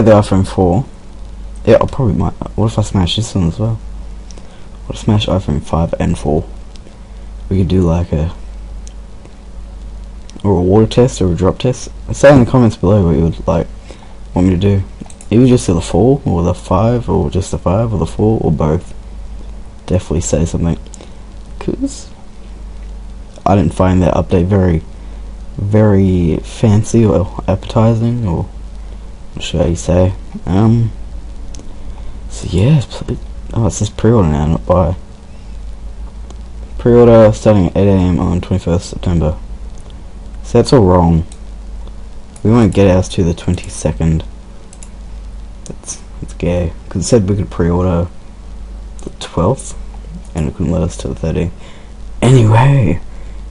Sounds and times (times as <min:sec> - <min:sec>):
Speech: 0:00.0 - 0:00.9, 0:01.6 - 0:03.8, 0:04.8 - 0:06.5, 0:07.5 - 0:08.4, 0:10.3 - 0:13.7, 0:14.3 - 0:19.0, 0:19.8 - 0:20.8, 0:21.6 - 0:22.2, 0:23.4 - 0:24.9, 0:25.6 - 0:28.6, 0:29.4 - 0:31.0, 0:32.3 - 0:35.0, 0:36.8 - 0:39.4, 0:40.4 - 0:41.3, 0:42.4 - 0:44.3, 0:45.6 - 0:48.1, 0:49.0 - 0:51.6, 0:52.2 - 0:53.0.